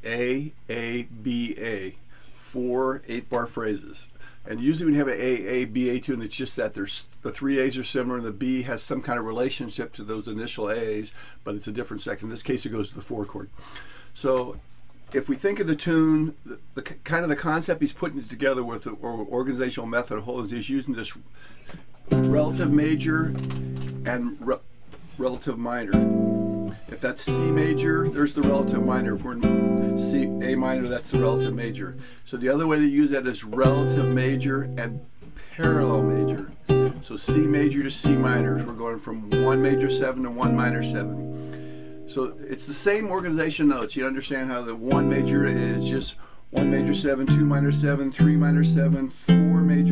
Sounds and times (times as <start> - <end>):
Speech: 0.0 - 13.6, 14.2 - 21.3, 22.2 - 23.4, 24.1 - 26.1, 26.9 - 41.2, 42.1 - 49.9
Strum: 22.1 - 32.8, 33.4 - 42.8, 44.8 - 49.9.